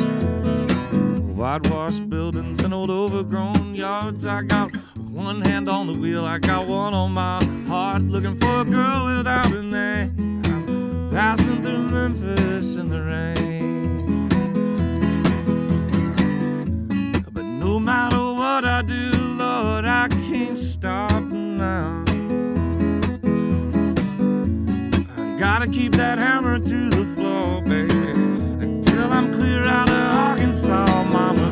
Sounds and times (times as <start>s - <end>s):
Music: 0.0s - 31.5s.